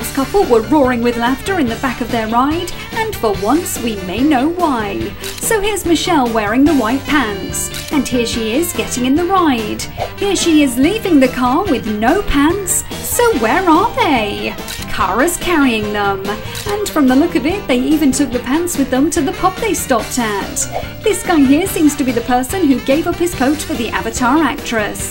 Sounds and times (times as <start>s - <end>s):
Music: 0.0s - 25.1s
Speech: 0.0s - 25.1s.